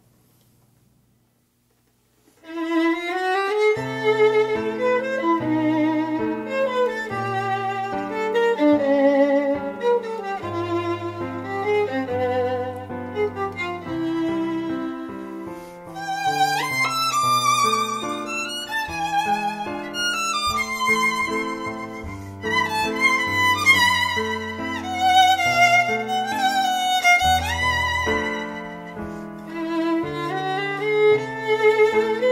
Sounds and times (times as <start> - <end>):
Violin, fiddle: 2.4 - 32.3.